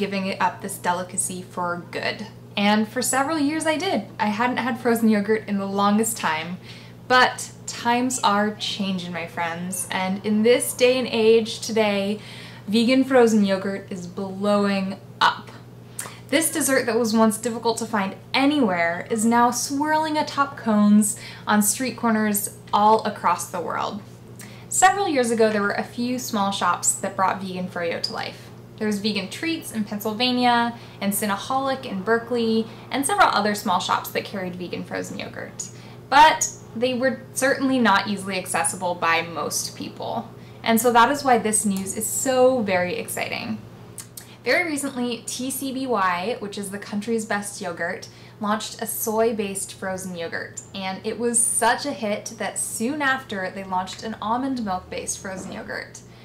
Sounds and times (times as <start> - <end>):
Speech: 0.0 - 24.0, 24.7 - 56.1.